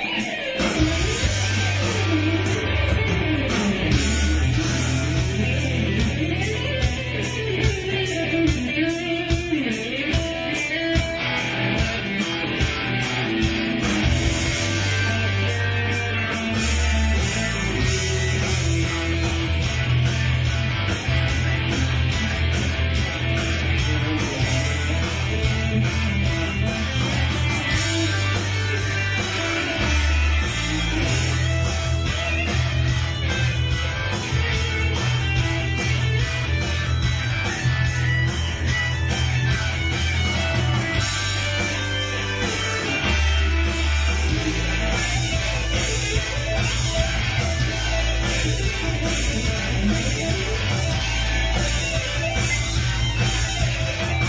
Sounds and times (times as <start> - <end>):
Blues: 0.0 - 54.2.